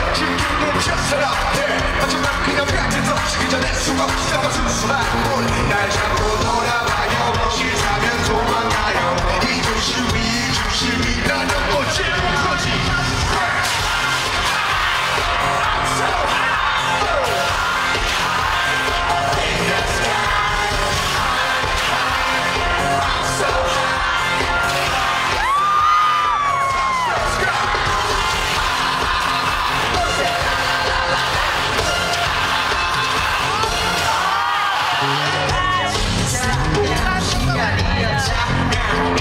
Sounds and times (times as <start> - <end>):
Crowd: 0.0 - 39.2
Music: 0.0 - 39.2.